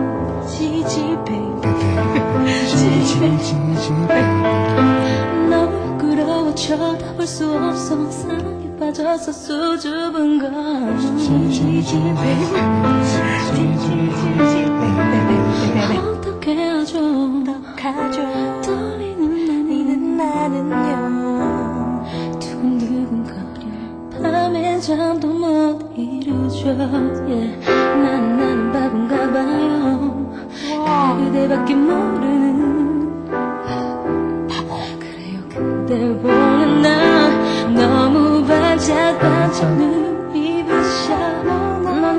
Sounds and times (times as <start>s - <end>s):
Music: 0.0s - 42.1s
Female singing: 0.5s - 4.6s, 5.3s - 33.2s, 34.5s - 42.1s.